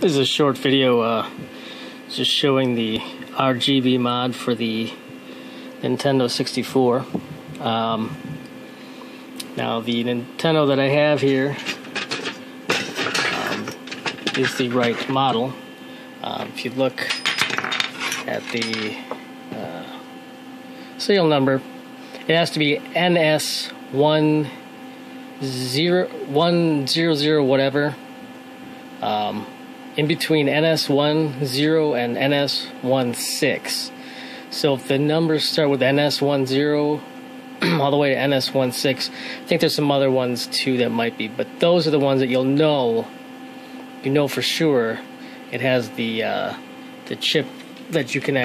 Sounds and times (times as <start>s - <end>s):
Speech: 0.0s - 1.4s, 2.1s - 5.0s, 5.8s - 8.2s, 9.4s - 11.6s, 14.3s - 15.6s, 16.2s - 17.2s, 18.2s - 20.1s, 21.0s - 21.7s, 22.3s - 24.6s, 25.4s - 28.0s, 29.0s - 43.1s, 44.0s - 48.4s.